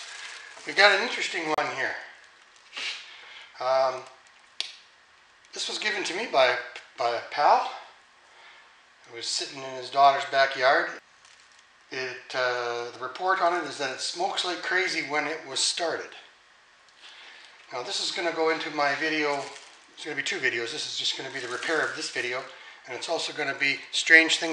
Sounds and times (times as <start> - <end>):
Speech: 0.6 - 2.2, 3.6 - 4.1, 5.6 - 8.0, 9.1 - 11.0, 11.9 - 16.4, 17.7 - 24.5.